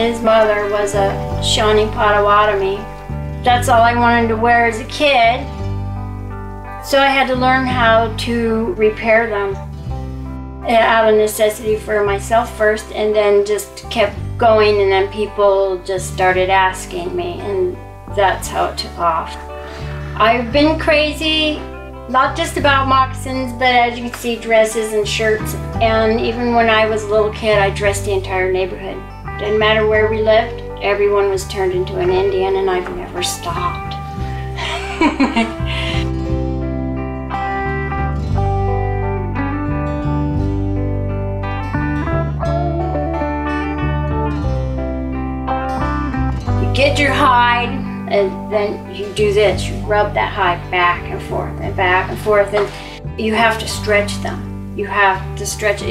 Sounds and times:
Speech: 0.0 - 5.4, 6.9 - 9.6, 10.7 - 19.4, 20.1 - 34.0, 46.6 - 55.9
Music: 0.0 - 55.9.

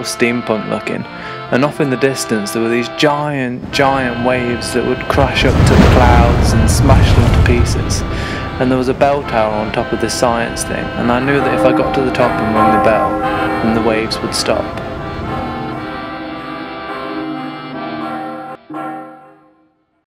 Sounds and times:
Speech: 0.0 - 14.8
Music: 0.0 - 20.0.

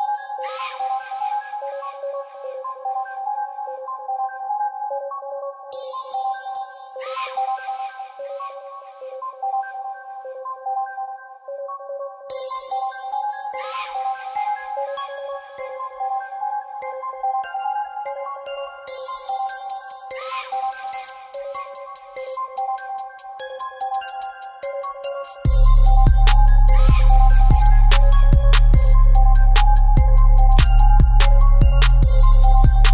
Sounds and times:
Synthesizer: 0.0 - 32.9.

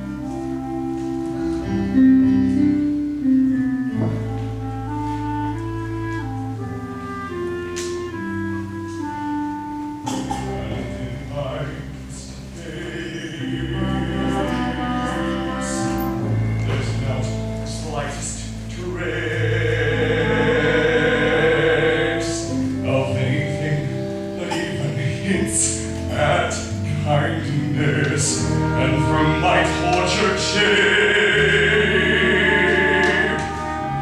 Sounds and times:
Music: 0.0 - 34.0
Male singing: 10.4 - 16.1, 16.7 - 34.0.

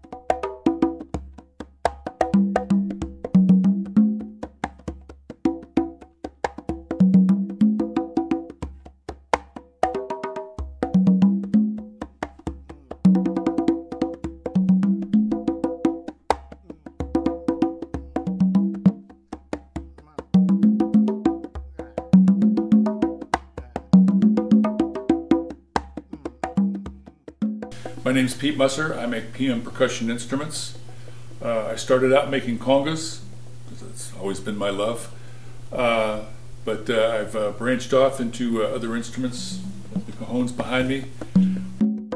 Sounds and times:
Wood block: 0.0 - 28.1, 39.4 - 42.1
Speech: 28.0 - 30.8, 31.4 - 35.1, 35.7 - 41.1.

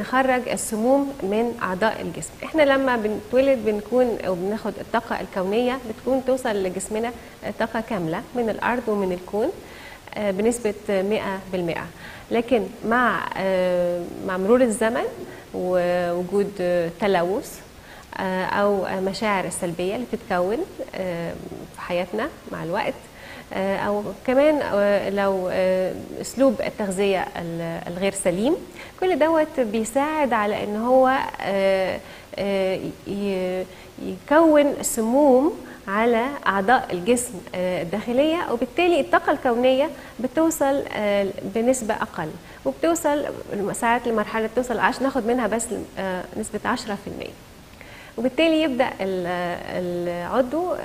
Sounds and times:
Speech: 0.0 - 47.4, 48.2 - 50.8.

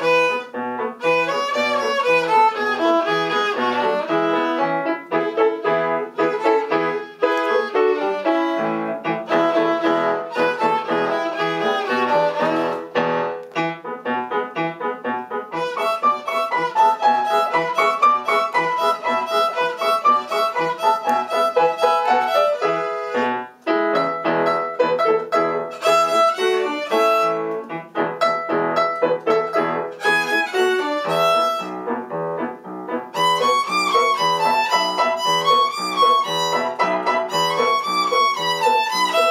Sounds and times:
Violin, fiddle: 0.0 - 13.3, 15.5 - 28.4, 29.3 - 32.0, 33.2 - 39.3.

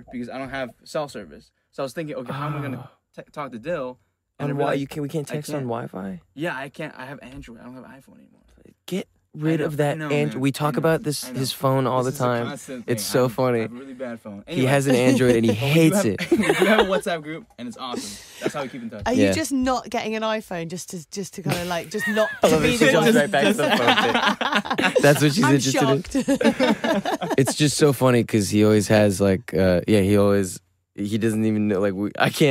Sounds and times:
Speech: 0.0 - 8.3, 8.9 - 26.4, 27.3 - 32.5.

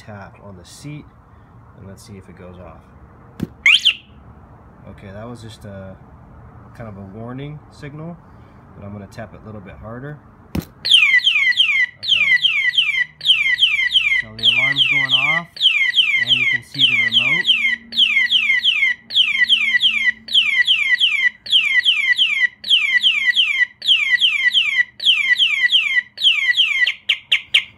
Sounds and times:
Speech: 0.0 - 1.1, 1.8 - 2.9, 4.8 - 6.0, 6.8 - 8.2, 8.8 - 10.2, 12.0 - 12.4, 14.2 - 15.5, 16.2 - 17.5
Alarm: 3.6 - 4.1, 10.9 - 27.7.

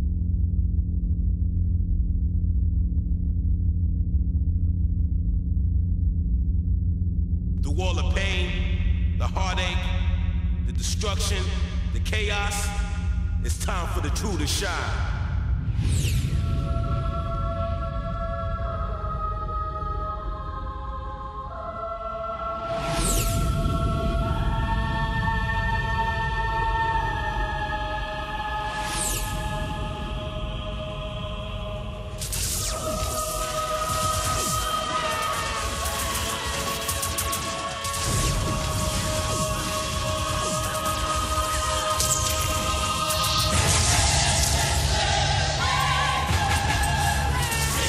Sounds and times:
Music: 0.0 - 47.8.

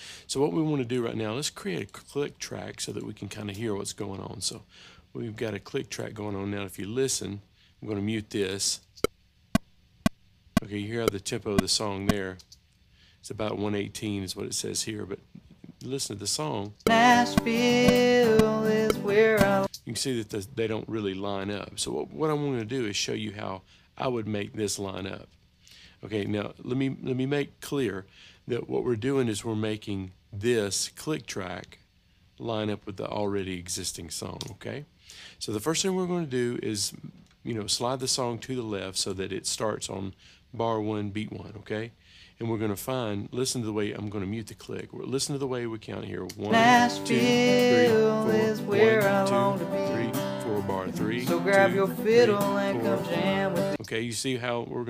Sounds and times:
Speech: 0.3 - 8.9, 10.6 - 12.5, 13.2 - 16.8, 19.2 - 25.3, 26.0 - 31.8, 32.4 - 54.8.

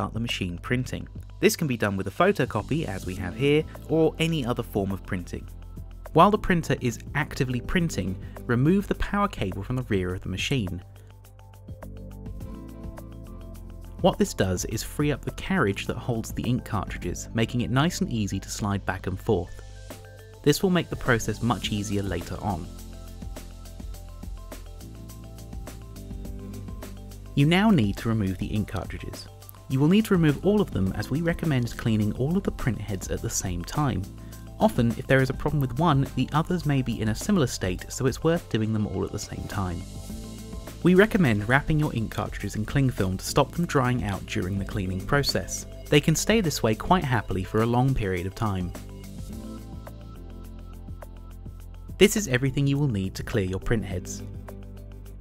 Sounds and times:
Speech: 0.0 - 5.5, 6.2 - 10.8, 14.0 - 19.6, 20.4 - 22.8, 27.4 - 39.9, 40.8 - 48.8, 52.0 - 54.3
Music: 0.0 - 55.2.

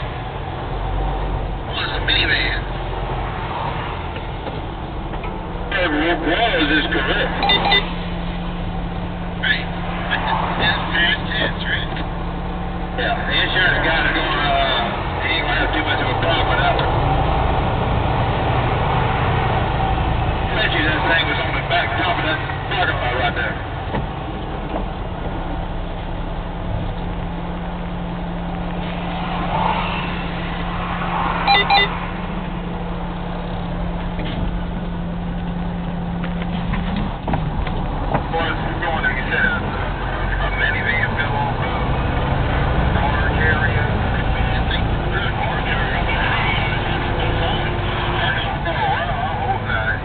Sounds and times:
Car: 0.0 - 50.0.

